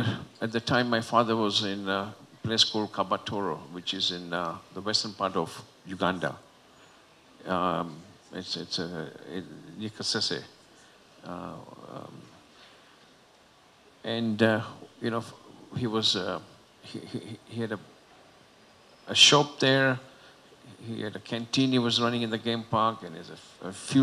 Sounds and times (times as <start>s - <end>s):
Speech: 0.0s - 6.4s, 7.4s - 10.5s, 11.2s - 12.4s, 14.1s - 17.9s, 19.1s - 20.0s, 20.7s - 24.0s.